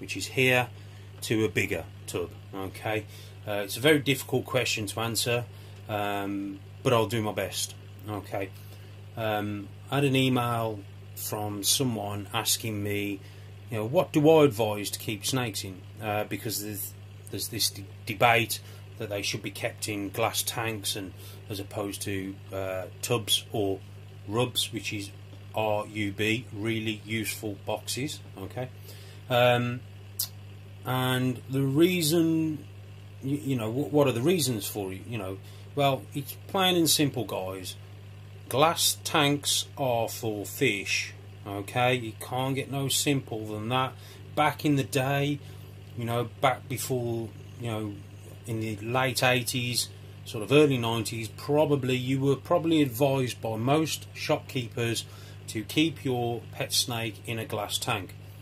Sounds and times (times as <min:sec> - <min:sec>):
Speech: 0:00.0 - 0:08.6, 0:09.2 - 0:37.8, 0:38.5 - 0:45.4, 0:46.0 - 0:58.2
Inside, small room: 0:00.0 - 0:58.4.